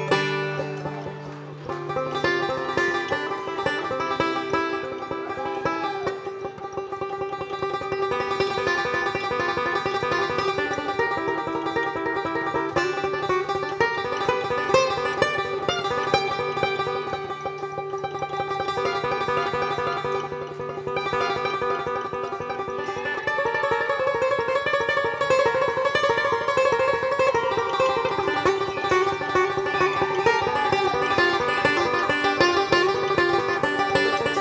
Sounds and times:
Mandolin: 0.0s - 34.4s.

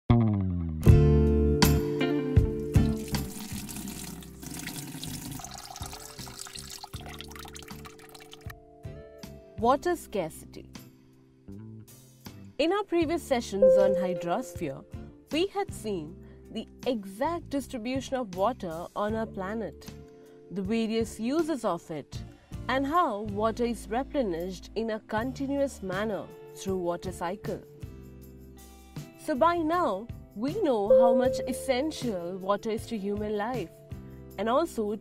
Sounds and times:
Water tap, faucet: 2.7s - 8.5s
Water: 2.8s - 8.5s.

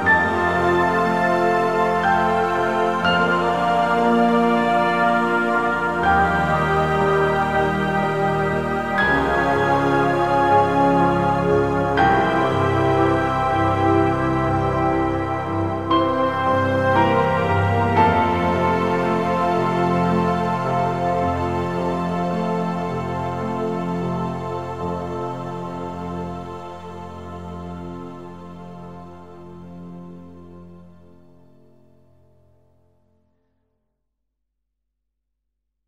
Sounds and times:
New-age music: 0.0s - 32.6s.

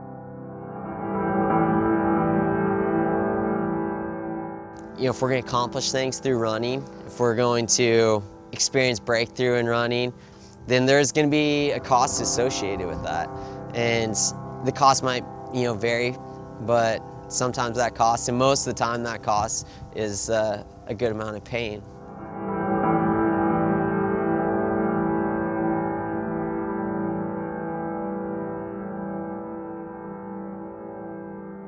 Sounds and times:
Music: 0.0s - 31.6s
Speech: 5.0s - 10.1s, 10.7s - 21.8s.

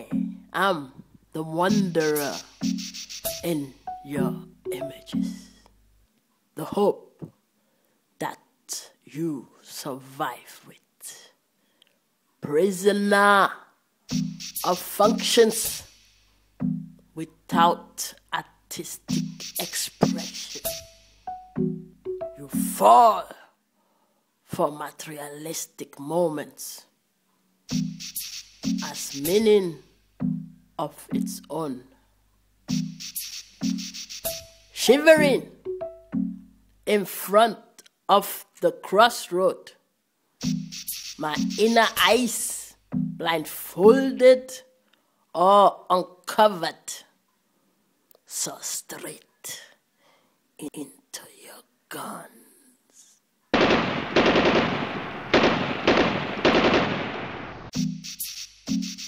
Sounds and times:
Speech: 0.0s - 2.4s, 3.4s - 5.5s, 6.6s - 7.1s, 8.2s - 11.4s, 12.4s - 13.7s, 14.6s - 15.8s, 17.2s - 20.4s, 22.4s - 23.5s, 24.5s - 26.9s, 28.8s - 29.8s, 30.8s - 32.0s, 34.8s - 35.6s, 36.9s - 39.8s, 41.2s - 44.7s, 45.4s - 47.1s, 48.2s - 49.8s, 50.6s - 53.2s
Electronica: 1.6s - 5.7s, 14.1s - 17.0s, 19.0s - 22.8s, 27.7s - 30.6s, 32.7s - 36.6s, 40.4s - 43.2s, 57.7s - 59.0s.

